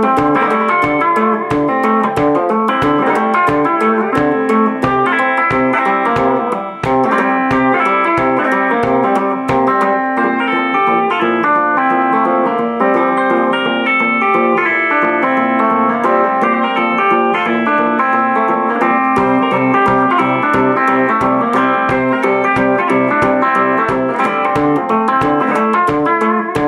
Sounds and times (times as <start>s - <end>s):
Acoustic guitar: 0.0s - 26.6s
Strum: 0.0s - 26.6s.